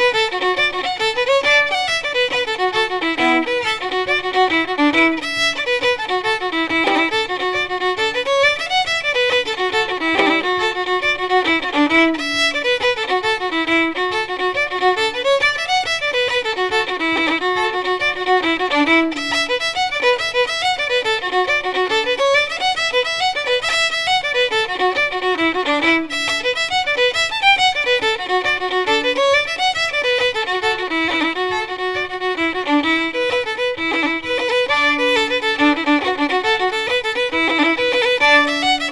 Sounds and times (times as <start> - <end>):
Violin, fiddle: 0.0 - 38.9.